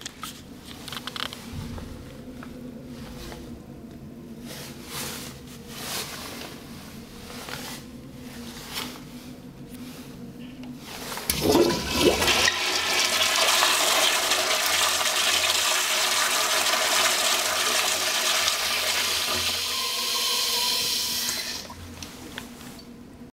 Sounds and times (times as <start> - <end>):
Toilet flush: 11.3 - 21.8.